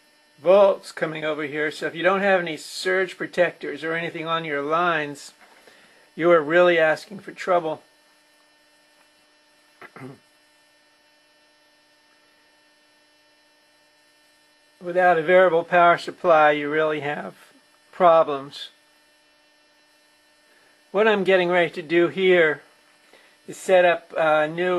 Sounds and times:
Speech: 0:00.4 - 0:05.4, 0:06.2 - 0:07.8, 0:09.8 - 0:10.2, 0:14.8 - 0:18.8, 0:21.0 - 0:22.6, 0:23.5 - 0:24.7.

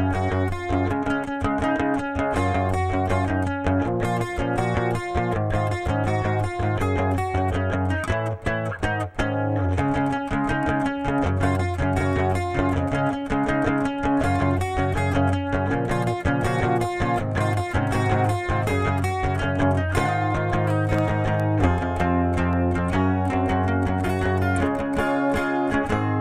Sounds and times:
Electric guitar: 0:00.0 - 0:26.2.

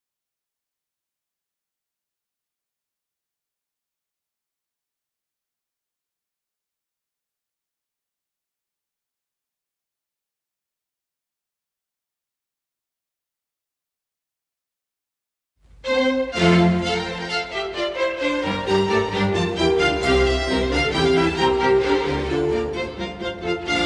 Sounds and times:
Violin, fiddle: 0:15.8 - 0:23.8.

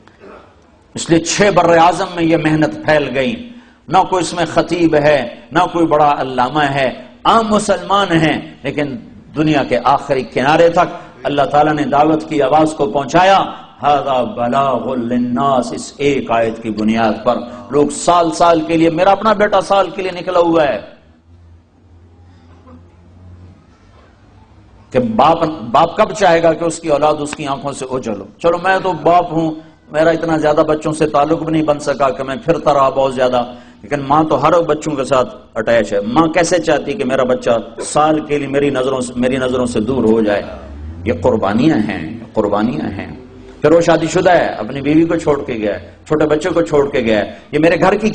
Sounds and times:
Narration, monologue: 0:00.0 - 0:21.9, 0:24.6 - 0:48.1
Male speech, man speaking: 0:01.0 - 0:21.0, 0:24.9 - 0:48.1.

